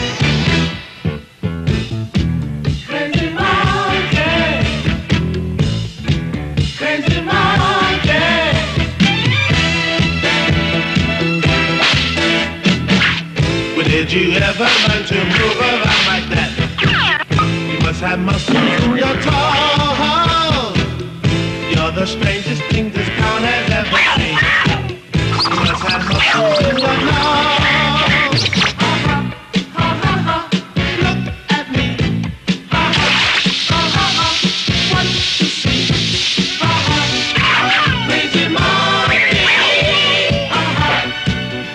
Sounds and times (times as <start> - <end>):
Music: 0.0 - 41.7.